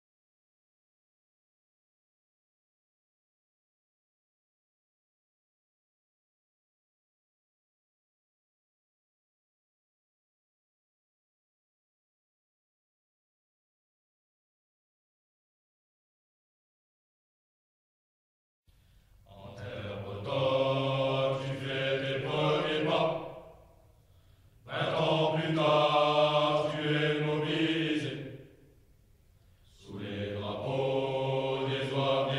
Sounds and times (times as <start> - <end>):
Mantra: 19.3 - 23.5, 24.6 - 28.4, 29.8 - 32.3.